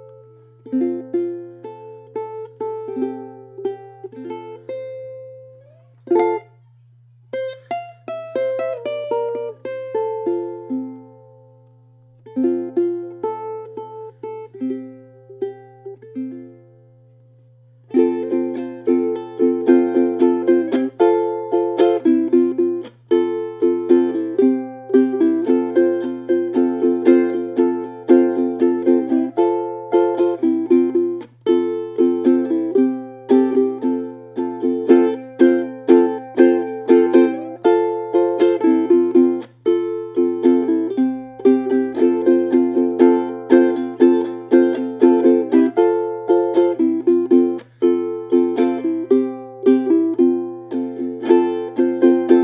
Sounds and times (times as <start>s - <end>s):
Music: 0.0s - 52.4s.